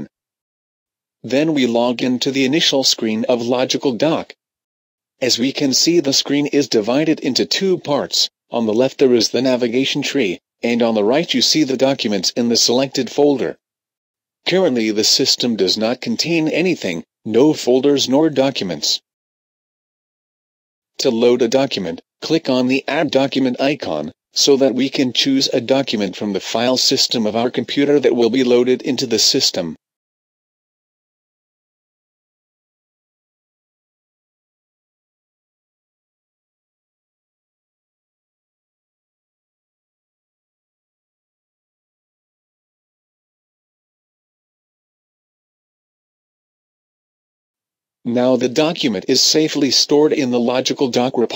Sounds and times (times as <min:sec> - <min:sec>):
Speech: 0:01.3 - 0:04.4, 0:05.2 - 0:13.6, 0:14.5 - 0:19.1, 0:21.0 - 0:29.8, 0:48.1 - 0:51.3.